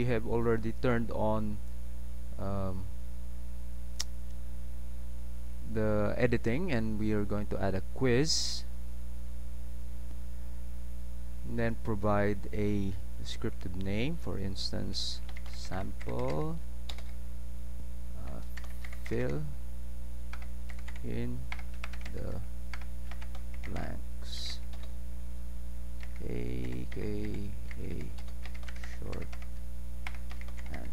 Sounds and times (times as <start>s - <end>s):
Speech: 0.0s - 1.6s, 2.4s - 2.9s, 5.7s - 8.7s, 11.5s - 16.6s, 18.2s - 18.5s, 19.1s - 19.6s, 21.0s - 21.4s, 22.1s - 22.5s, 23.7s - 24.6s, 26.2s - 28.2s, 28.9s - 29.3s, 30.7s - 30.9s.